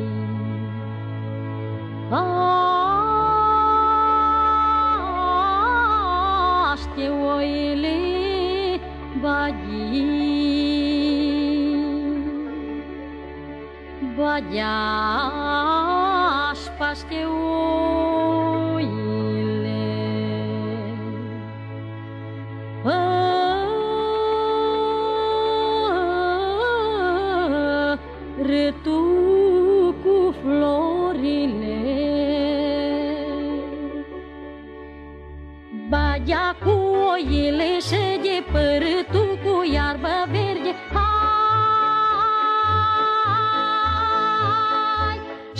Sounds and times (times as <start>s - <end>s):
Music: 0.0s - 45.5s.